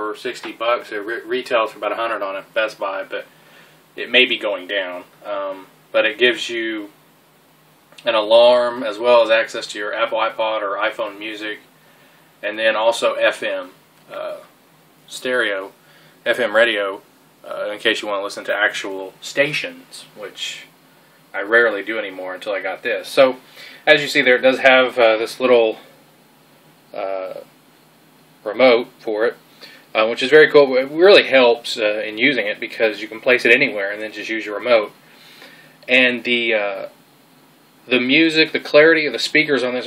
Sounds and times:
Speech: 0.0 - 3.3, 4.0 - 7.0, 8.0 - 11.7, 12.4 - 14.5, 15.1 - 20.7, 21.3 - 25.9, 27.0 - 27.5, 28.4 - 35.0, 35.8 - 37.0, 37.9 - 39.8.

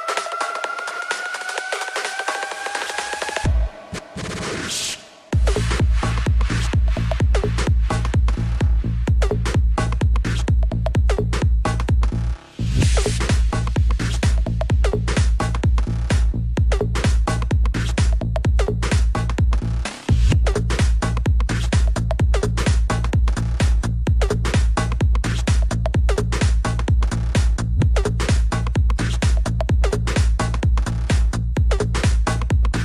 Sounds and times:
Techno: 0.0 - 32.8.

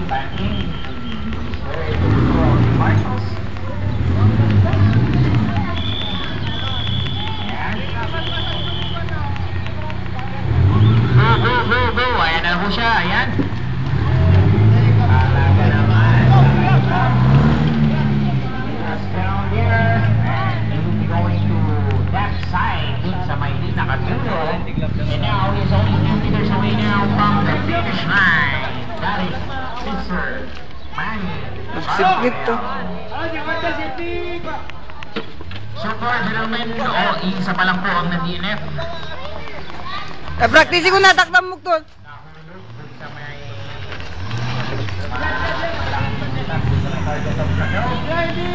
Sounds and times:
Speech: 0.0 - 35.1, 45.0 - 48.5.

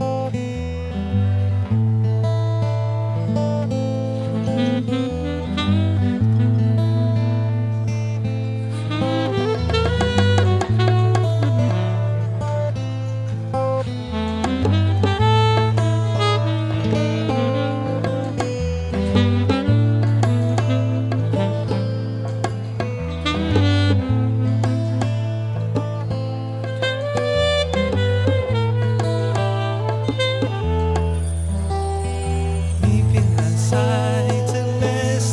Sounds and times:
Middle Eastern music: 30.3 - 35.3.

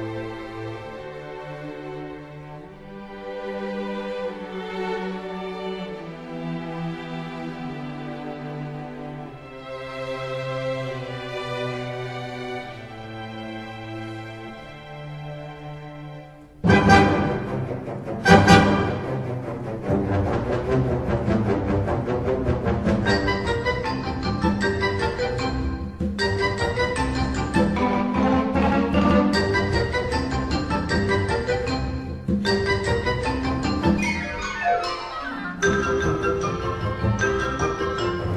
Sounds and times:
Orchestra: 0.0 - 38.3.

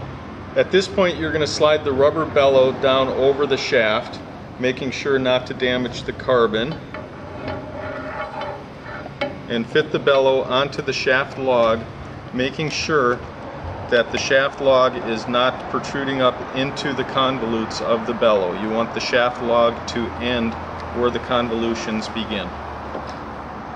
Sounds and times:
Speech: 0.6 - 6.8, 9.5 - 13.2, 13.9 - 22.6.

